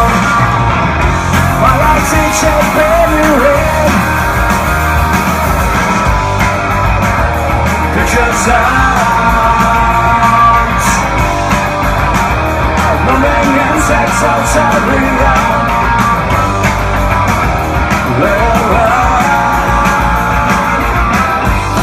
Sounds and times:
Music: 0.0 - 21.8.

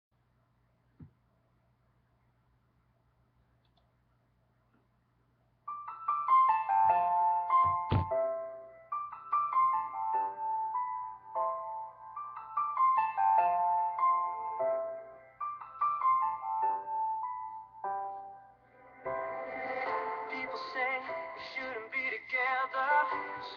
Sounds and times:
Music: 5.6 - 23.5.

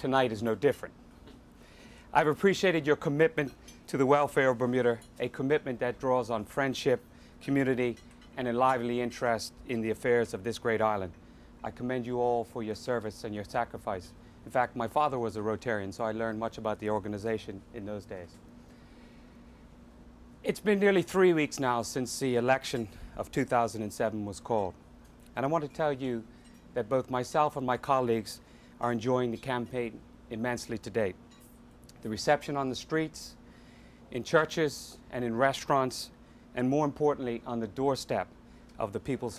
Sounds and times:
Male speech, man speaking: 0.0 - 1.0, 2.2 - 18.4, 20.4 - 24.8, 25.4 - 31.2, 32.0 - 33.4, 34.1 - 39.3
Narration, monologue: 0.0 - 39.3.

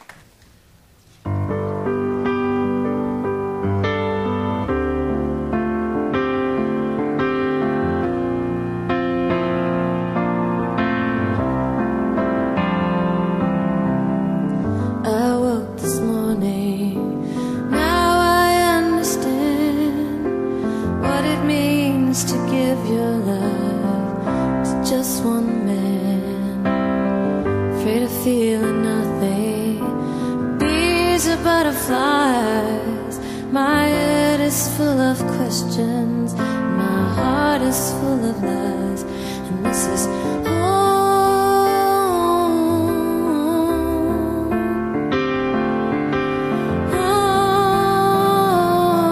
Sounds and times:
Music: 0.0 - 49.1.

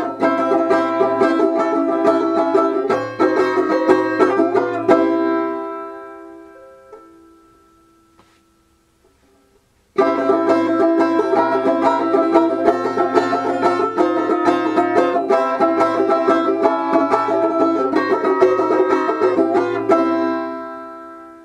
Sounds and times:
Banjo: 0.0 - 7.5, 10.0 - 21.4
Inside, small room: 0.0 - 21.4.

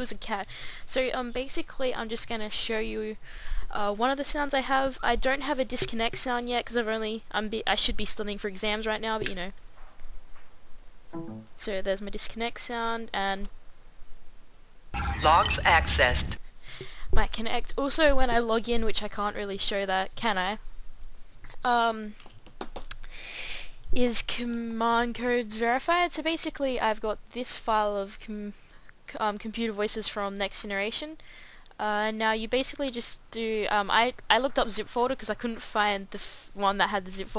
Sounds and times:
Speech: 0.0 - 9.6, 11.6 - 13.5, 15.0 - 16.4, 17.2 - 20.6, 21.6 - 22.2, 24.0 - 31.2, 31.8 - 37.3.

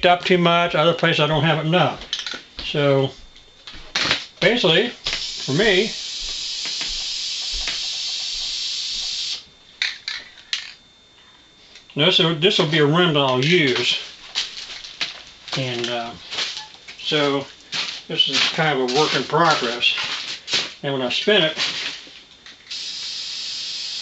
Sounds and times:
Speech: 0.0 - 2.0, 2.6 - 3.2, 4.4 - 6.0, 12.0 - 14.1, 15.6 - 16.2, 17.0 - 17.5, 18.1 - 20.1, 20.8 - 21.6.

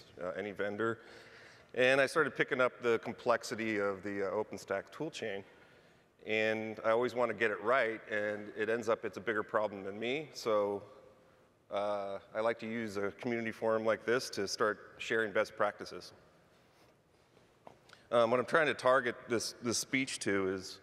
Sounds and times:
Speech: 0.0 - 1.0, 1.7 - 5.5, 6.2 - 10.9, 11.7 - 16.2, 18.1 - 20.8.

